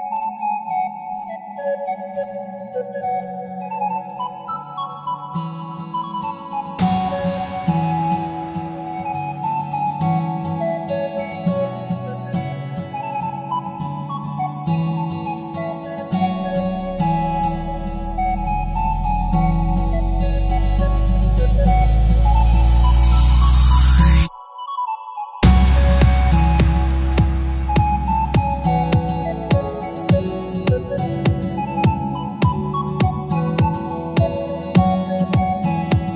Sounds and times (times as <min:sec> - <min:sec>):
Music: 0:00.0 - 0:36.1.